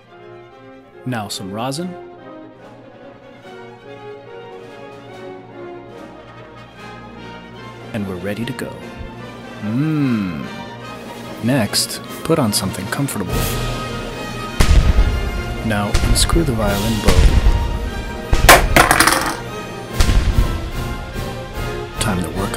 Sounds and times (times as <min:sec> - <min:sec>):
Speech: 0:01.0 - 0:02.0, 0:07.9 - 0:08.8, 0:11.4 - 0:13.4, 0:15.6 - 0:17.3, 0:22.0 - 0:22.5.